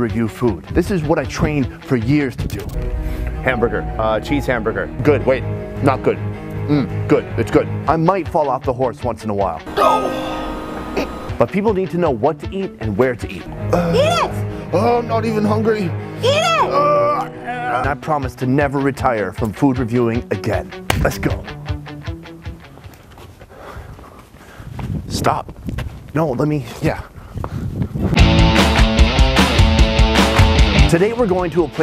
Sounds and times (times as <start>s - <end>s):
Music: 0.0s - 23.8s, 28.2s - 31.8s
Speech: 7.1s - 9.6s, 11.4s - 13.5s, 17.5s - 21.5s, 26.1s - 27.1s, 30.9s - 31.8s.